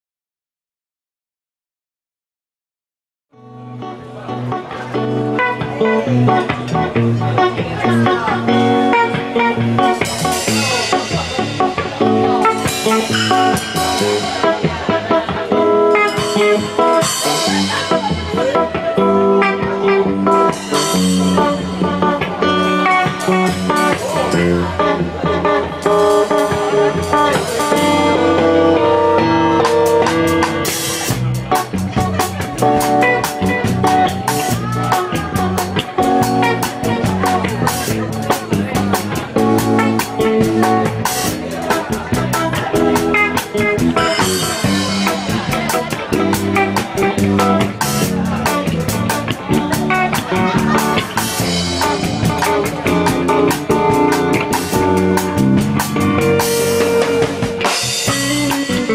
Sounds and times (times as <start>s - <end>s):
Speech: 3.4s - 58.9s
Funk: 3.6s - 58.9s.